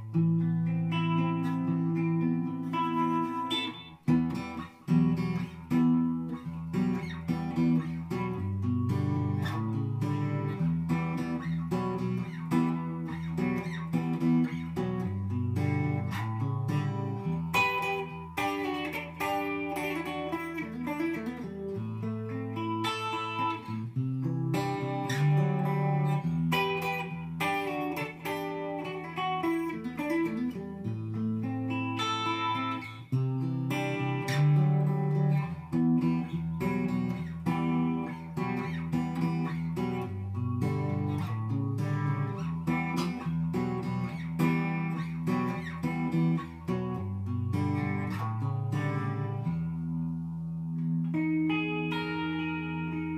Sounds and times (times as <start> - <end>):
Music: 0.0 - 53.1.